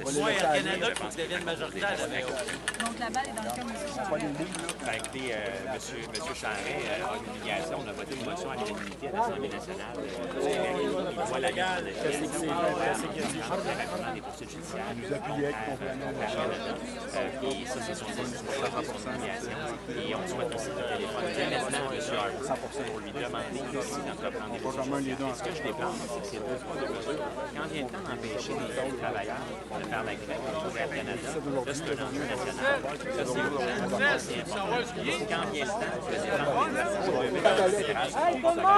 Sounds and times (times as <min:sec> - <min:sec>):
Crowd: 0:00.0 - 0:38.7
Speech: 0:00.0 - 0:38.7.